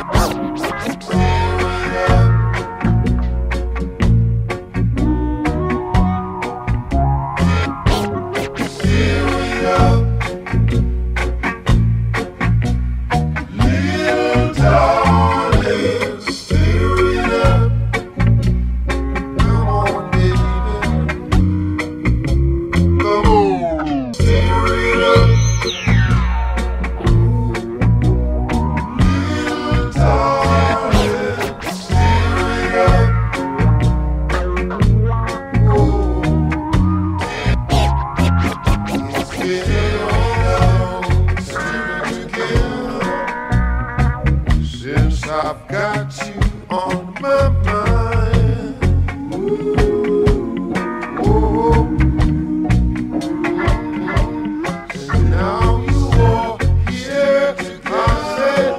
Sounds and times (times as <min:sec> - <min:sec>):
Music: 0:00.0 - 0:58.7.